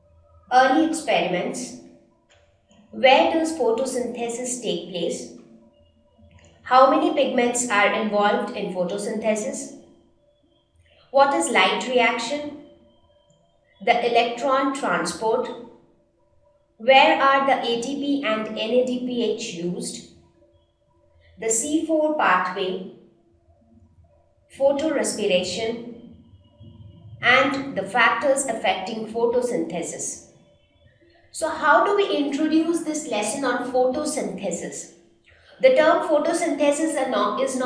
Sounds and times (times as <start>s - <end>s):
Speech: 0.5s - 1.7s, 3.0s - 5.3s, 6.7s - 9.7s, 11.2s - 12.5s, 13.8s - 15.6s, 16.8s - 20.0s, 21.4s - 22.9s, 24.6s - 30.2s, 31.4s - 37.6s.